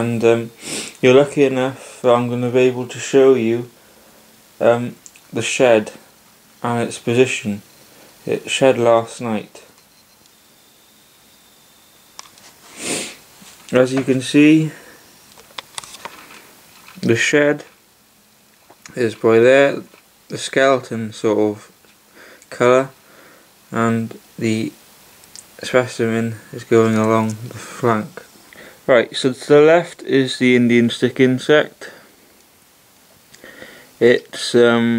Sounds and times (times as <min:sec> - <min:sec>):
Speech: 0:00.0 - 0:03.7, 0:04.6 - 0:07.6, 0:08.2 - 0:09.8, 0:13.7 - 0:14.8, 0:17.0 - 0:17.8, 0:18.9 - 0:21.7, 0:22.5 - 0:23.0, 0:23.7 - 0:24.8, 0:25.6 - 0:28.3, 0:28.9 - 0:32.0, 0:34.0 - 0:34.9.